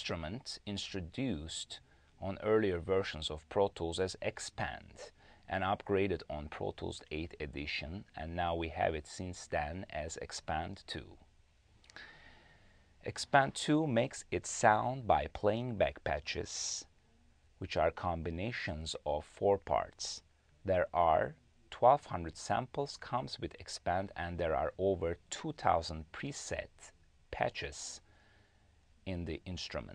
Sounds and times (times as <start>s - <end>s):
Speech: 0.0s - 11.3s, 13.0s - 17.0s, 17.6s - 28.1s, 29.0s - 29.9s.